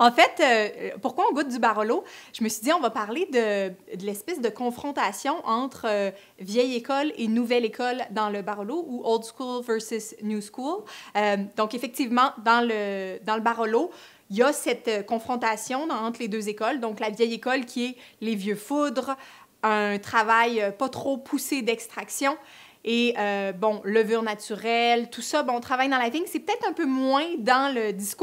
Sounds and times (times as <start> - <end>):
Speech: 0.0 - 28.2.